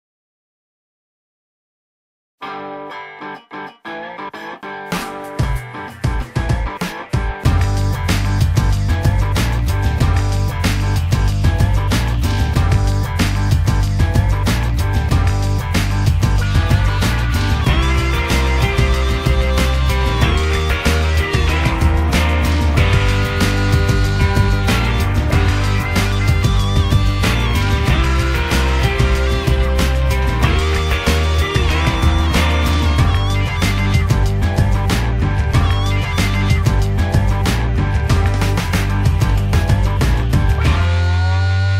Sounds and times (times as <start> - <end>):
Music: 2.4 - 41.7.